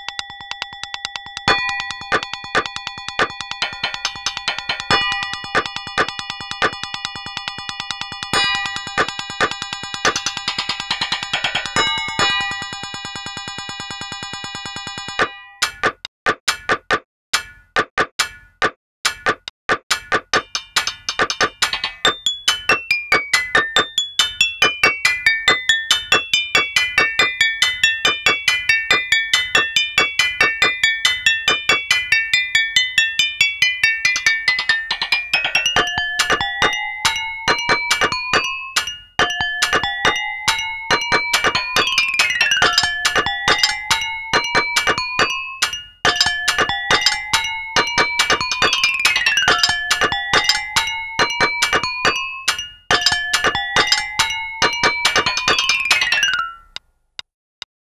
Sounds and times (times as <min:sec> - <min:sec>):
Music: 0:00.0 - 0:16.7, 0:17.4 - 0:56.8
Chink, clink: 0:34.1 - 0:56.7.